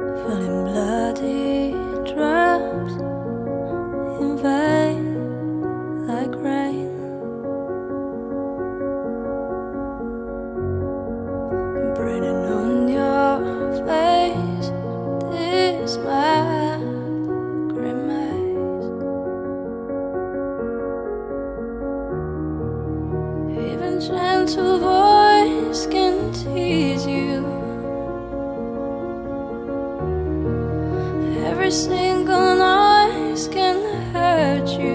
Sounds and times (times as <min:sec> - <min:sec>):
Music: 0:00.0 - 0:34.9.